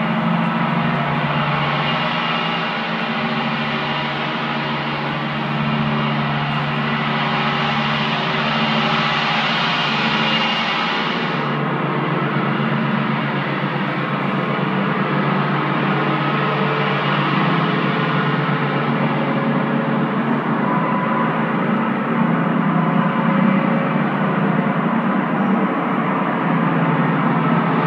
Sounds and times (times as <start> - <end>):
Gong: 0.0 - 27.8.